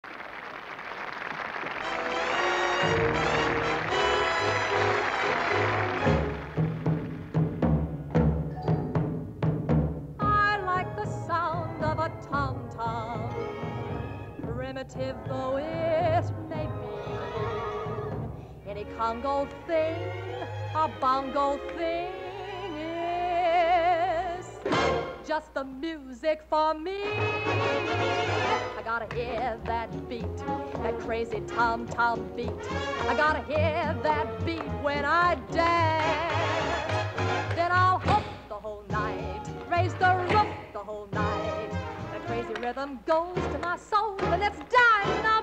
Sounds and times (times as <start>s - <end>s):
Timpani: 1.8s - 18.5s, 24.6s - 25.2s.